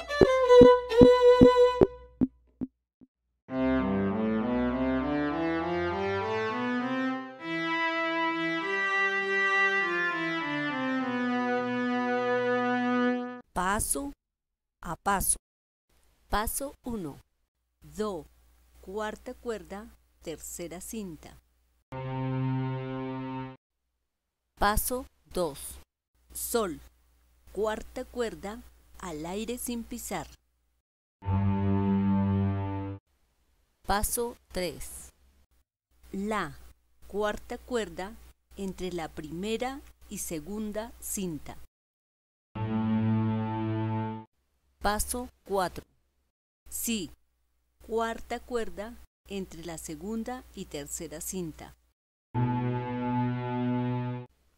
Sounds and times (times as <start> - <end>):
Speech: 13.6 - 14.2, 14.8 - 15.4, 16.3 - 17.2, 17.8 - 21.4, 24.6 - 26.9, 27.5 - 30.4, 33.9 - 35.2, 36.1 - 41.7, 44.8 - 45.9, 46.7 - 47.2, 47.8 - 51.8.